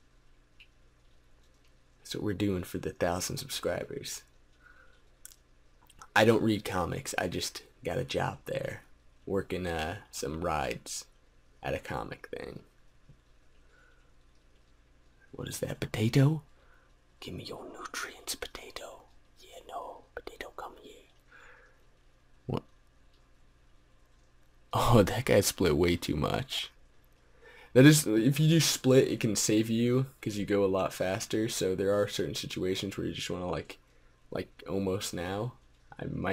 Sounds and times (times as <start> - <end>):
Whispering: 17.2 - 21.2.